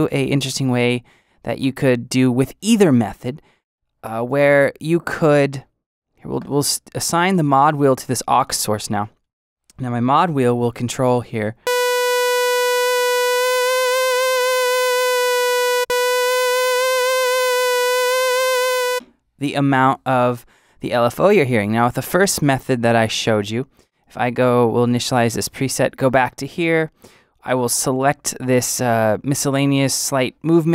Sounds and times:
Speech: 0.0s - 3.4s, 4.0s - 11.6s, 19.4s - 30.7s.

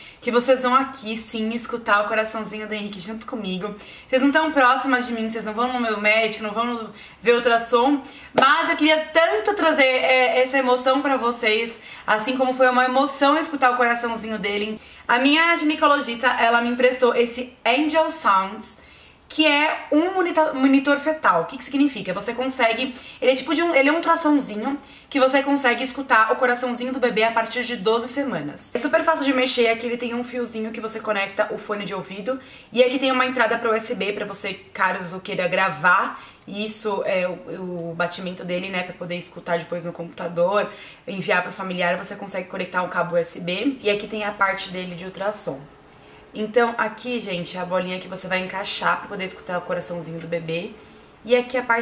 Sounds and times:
Speech: 0.2s - 45.7s, 46.4s - 51.8s.

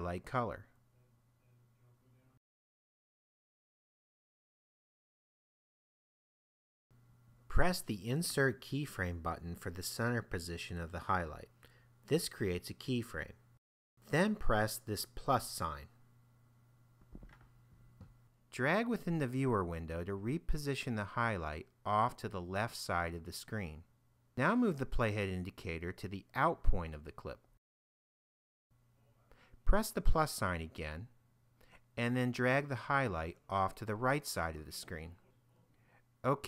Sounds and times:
Speech: 0.0s - 2.4s, 7.5s - 13.4s, 14.1s - 16.0s, 18.5s - 27.5s, 29.0s - 31.2s, 32.0s - 35.4s, 36.2s - 36.4s.

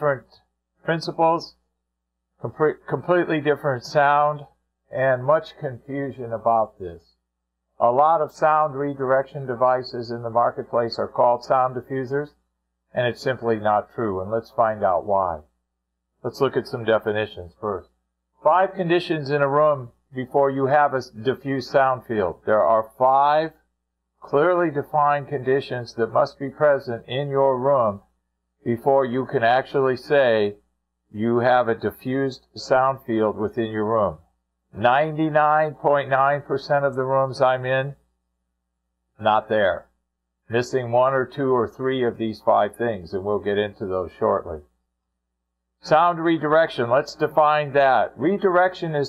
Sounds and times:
Speech: 0.0s - 1.6s, 2.4s - 7.1s, 7.8s - 15.5s, 16.2s - 23.6s, 24.2s - 28.0s, 28.6s - 34.2s, 34.8s - 38.0s, 39.2s - 39.9s, 40.5s - 44.7s, 45.8s - 49.0s.

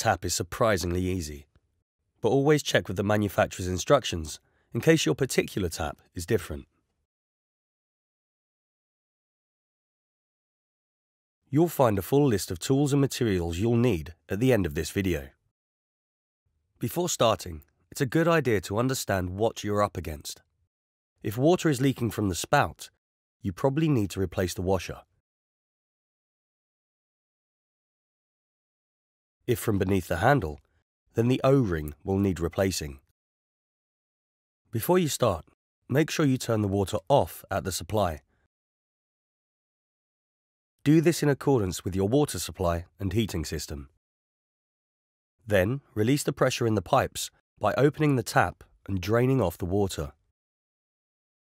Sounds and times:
Speech: 0.0s - 1.5s, 2.2s - 6.7s, 11.5s - 15.4s, 16.8s - 20.4s, 21.3s - 25.1s, 29.5s - 30.6s, 31.2s - 33.1s, 34.8s - 38.3s, 40.8s - 44.0s, 45.5s - 50.2s.

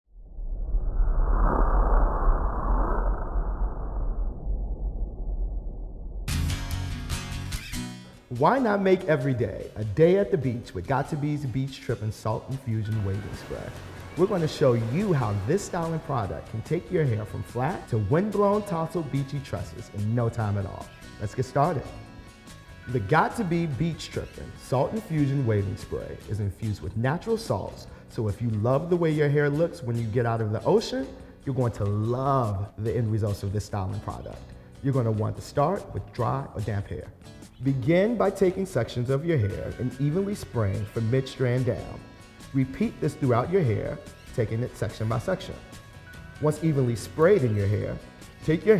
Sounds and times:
Music: 6.3s - 48.7s
Speech: 8.3s - 22.0s, 22.9s - 45.7s, 46.4s - 48.7s.

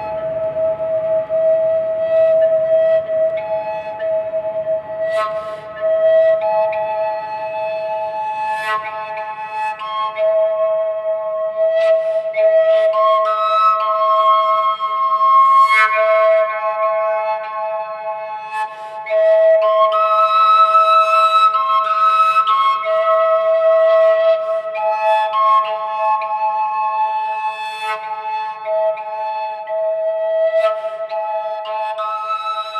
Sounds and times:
Flute: 0.0s - 32.8s.

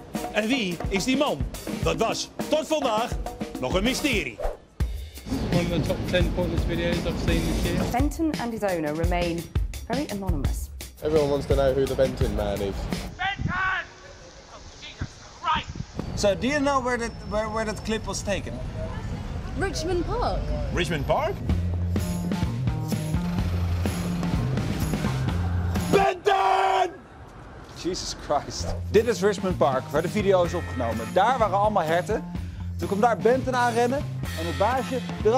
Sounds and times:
Music: 0.0s - 13.2s, 19.6s - 26.3s, 28.2s - 35.3s.

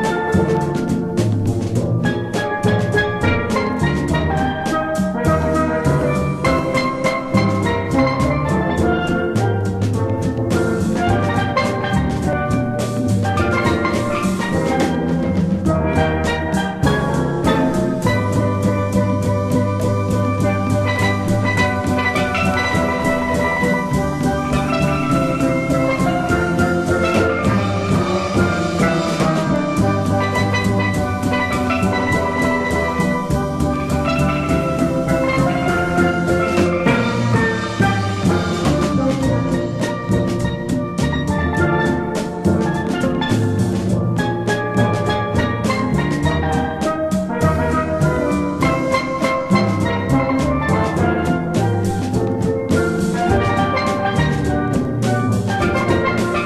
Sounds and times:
Drum: 0.0s - 56.4s
Steelpan: 0.0s - 56.4s.

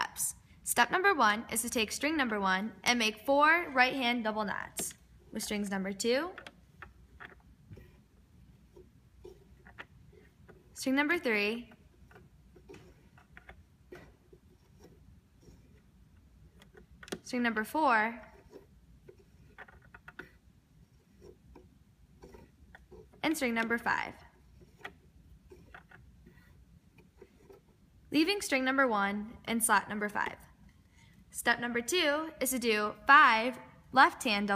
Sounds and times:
Speech: 0.0s - 6.4s, 10.8s - 11.7s, 17.3s - 18.2s, 23.3s - 24.2s, 28.2s - 30.4s, 31.4s - 34.5s.

